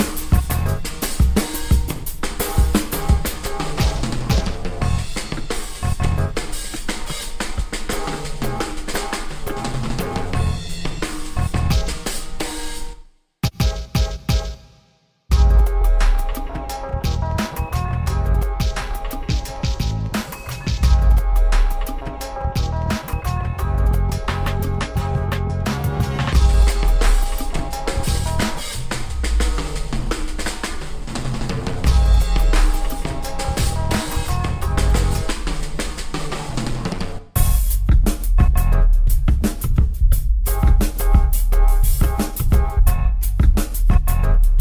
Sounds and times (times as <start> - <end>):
Music: 0.0 - 44.6.